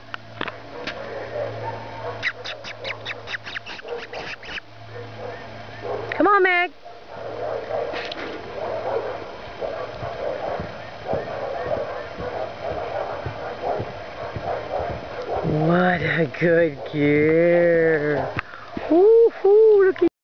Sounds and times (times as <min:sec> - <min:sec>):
Clip-clop: 0:07.2 - 0:17.6
Speech: 0:15.5 - 0:18.3.